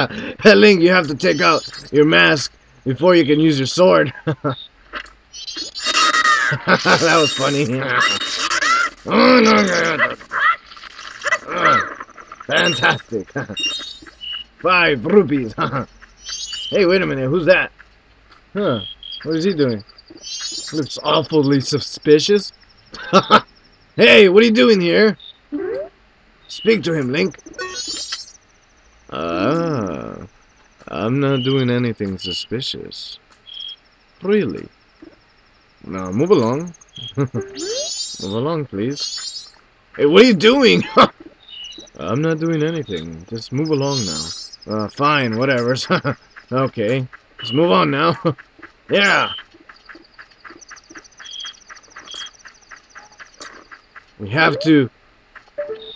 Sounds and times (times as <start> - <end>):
Speech: 0.0 - 4.3, 6.9 - 8.2, 9.1 - 10.1, 11.5 - 11.9, 12.5 - 13.5, 14.6 - 15.9, 16.7 - 17.7, 18.6 - 19.8, 20.8 - 22.5, 24.0 - 25.2, 26.5 - 27.4, 29.1 - 30.3, 30.9 - 33.2, 34.2 - 34.7, 35.8 - 39.0, 40.0 - 41.1, 42.0 - 49.4, 54.2 - 54.9.